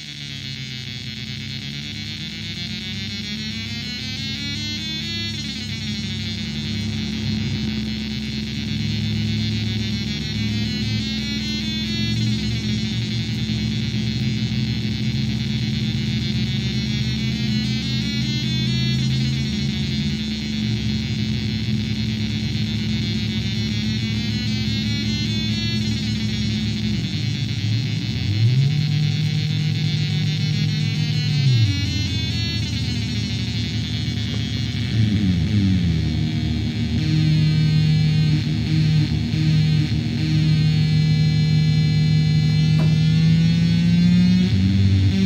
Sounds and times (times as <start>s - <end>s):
Synthesizer: 0.0s - 45.2s.